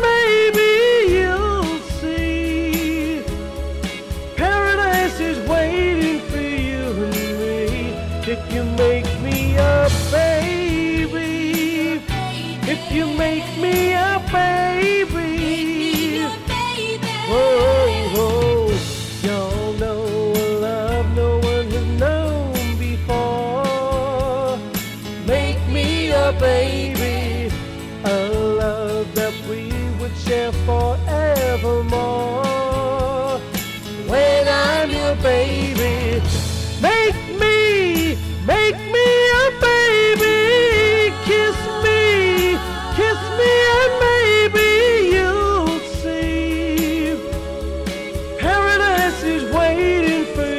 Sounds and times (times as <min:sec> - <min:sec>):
Rhythm and blues: 0:00.0 - 0:50.5.